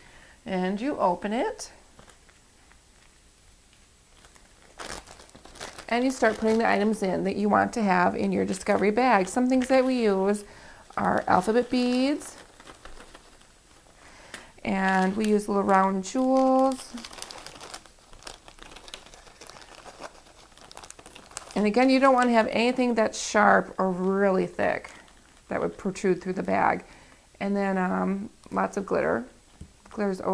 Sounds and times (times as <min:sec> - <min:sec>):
Inside, small room: 0:00.0 - 0:30.3
Speech: 0:00.5 - 0:01.8, 0:05.9 - 0:12.4, 0:14.6 - 0:17.0, 0:21.6 - 0:26.8, 0:27.4 - 0:29.3, 0:30.0 - 0:30.3.